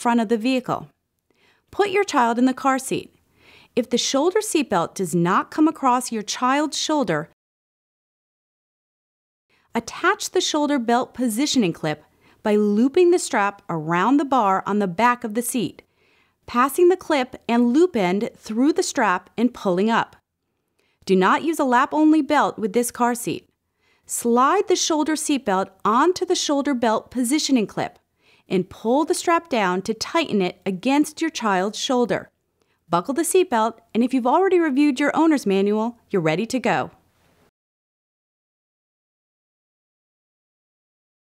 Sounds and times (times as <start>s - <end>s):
Speech: 0.0s - 1.0s, 1.7s - 3.2s, 3.8s - 7.4s, 9.8s - 15.8s, 16.5s - 20.2s, 21.1s - 23.5s, 24.1s - 32.3s, 32.9s - 37.0s.